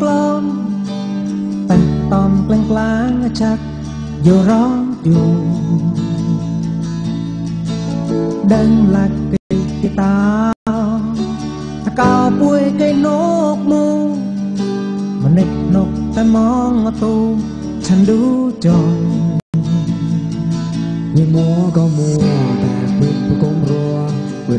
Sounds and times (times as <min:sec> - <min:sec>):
Music: 0:00.0 - 0:24.5.